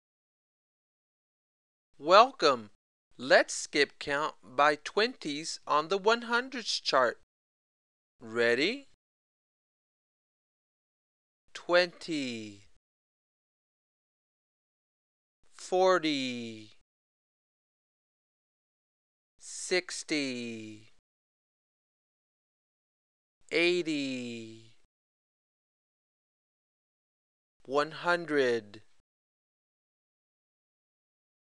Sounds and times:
Speech: 2.0s - 7.3s, 8.2s - 9.0s, 11.6s - 12.8s, 15.6s - 16.8s, 19.4s - 21.0s, 23.5s - 24.8s, 27.6s - 29.0s.

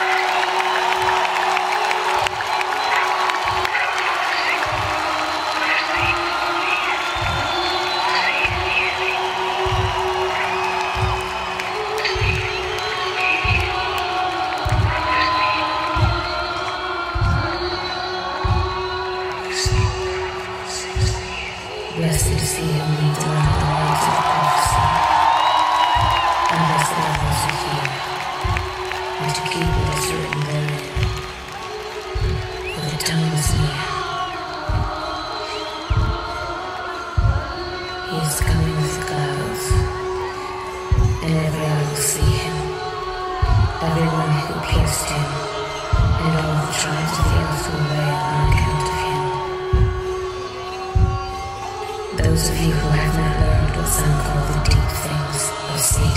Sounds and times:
Music: 0.0s - 56.1s
Speech: 2.7s - 11.2s, 11.8s - 25.4s, 26.4s - 28.2s, 29.2s - 31.1s, 32.6s - 35.2s, 38.0s - 40.0s, 41.2s - 49.5s, 52.1s - 56.1s.

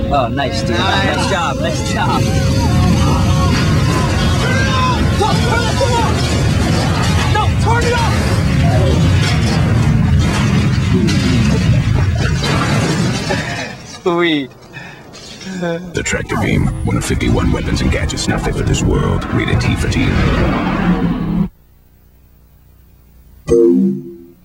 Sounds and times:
Speech: 15.5s - 20.4s.

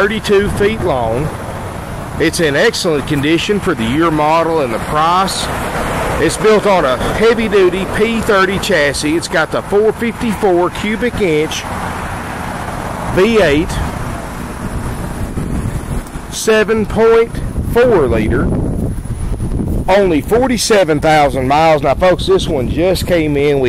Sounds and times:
Speech: 0.0s - 1.4s, 2.2s - 5.6s, 6.2s - 11.7s, 13.1s - 13.9s, 16.3s - 18.5s, 19.9s - 23.6s.

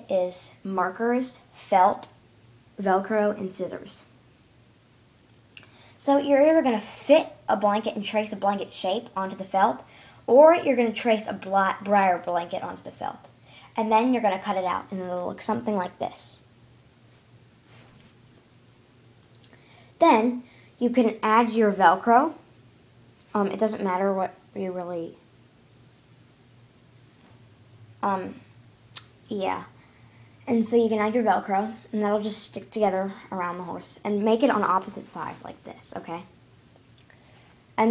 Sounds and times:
Speech: 0.0s - 2.2s, 2.8s - 4.2s, 6.0s - 16.5s, 20.0s - 22.5s, 23.3s - 25.2s, 28.0s - 28.5s, 29.3s - 29.8s, 30.5s - 36.3s.

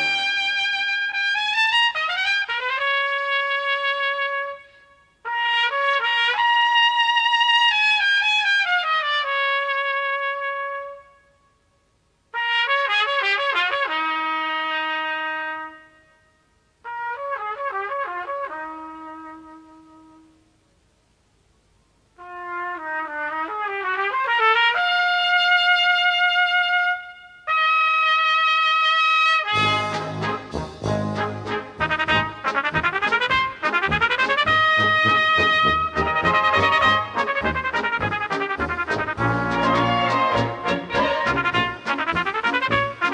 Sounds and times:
Trumpet: 0.0s - 11.4s, 12.3s - 20.6s, 22.2s - 43.1s.

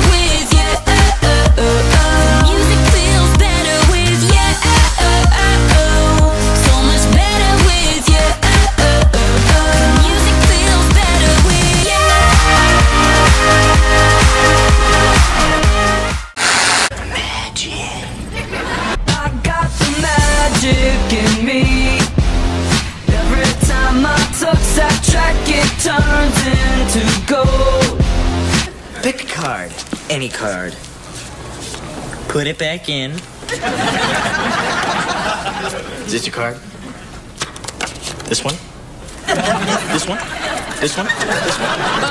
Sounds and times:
Music: 0.0s - 16.4s, 19.0s - 28.7s
Speech: 29.0s - 30.8s.

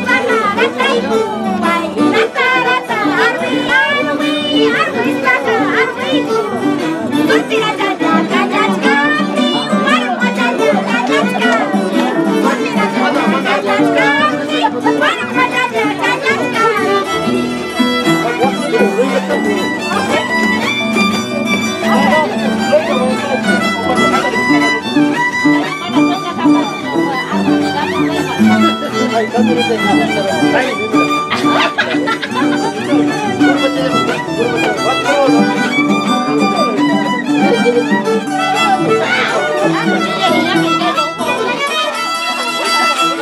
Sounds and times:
Speech: 0.0s - 43.2s
Violin, fiddle: 0.0s - 43.2s.

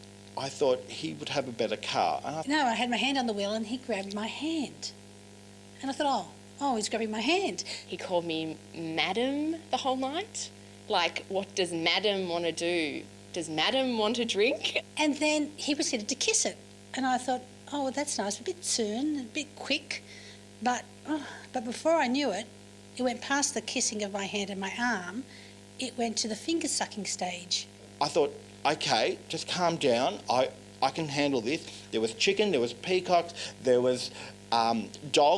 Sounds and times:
Conversation: 0.2s - 35.3s.

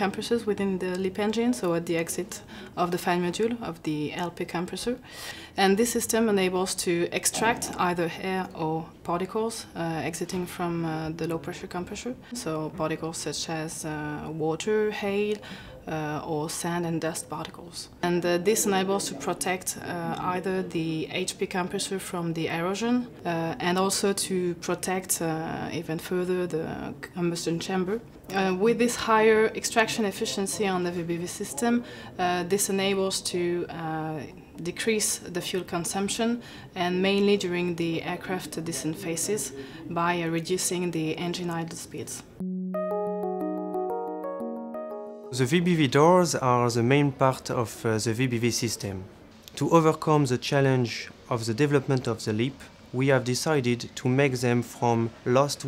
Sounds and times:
Speech: 0.0s - 5.0s, 5.6s - 42.4s, 45.4s - 55.6s.

